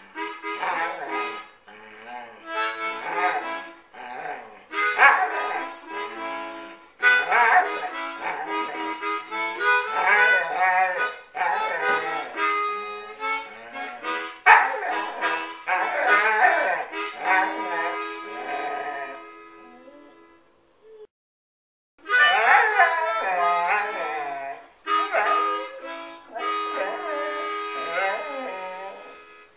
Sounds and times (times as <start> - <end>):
Music: 0.0 - 20.6, 22.0 - 29.5
Whimper (dog): 13.6 - 21.1, 22.2 - 29.3
Yip: 22.2 - 23.4.